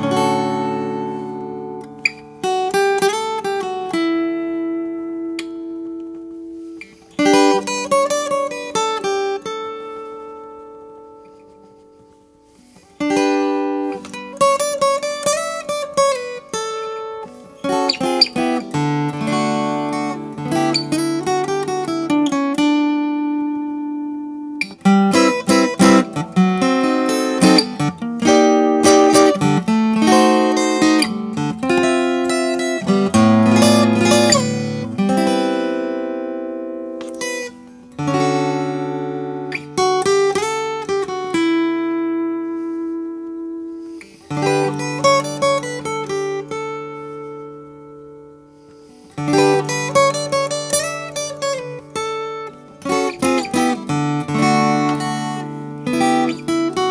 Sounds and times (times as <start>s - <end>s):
Guitar: 0.0s - 56.9s
Inside, small room: 0.0s - 56.9s.